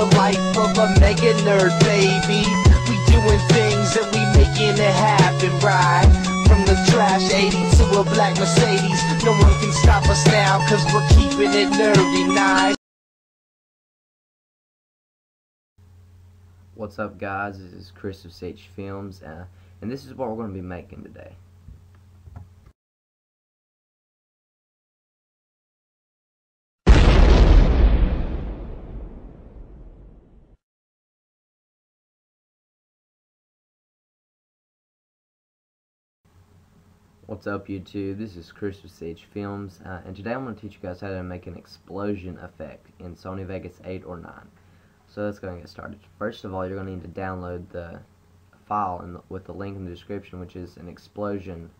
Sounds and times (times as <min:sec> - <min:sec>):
Speech: 0:16.8 - 0:21.4, 0:37.3 - 0:44.5, 0:45.1 - 0:51.7.